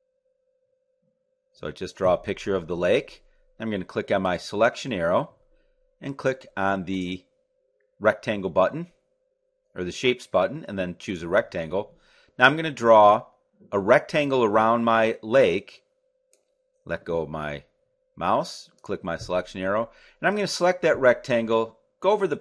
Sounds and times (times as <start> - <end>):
Speech: 1.6 - 5.4, 6.0 - 7.3, 8.0 - 9.0, 9.8 - 15.8, 16.9 - 22.4.